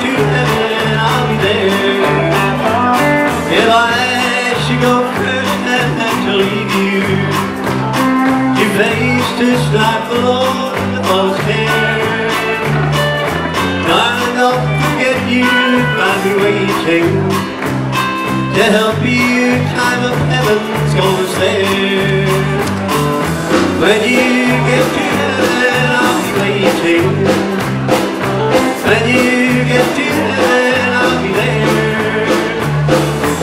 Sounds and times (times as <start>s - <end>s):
Singing: 0.0s - 2.8s, 23.8s - 27.4s, 28.7s - 33.4s
Music: 0.0s - 33.4s.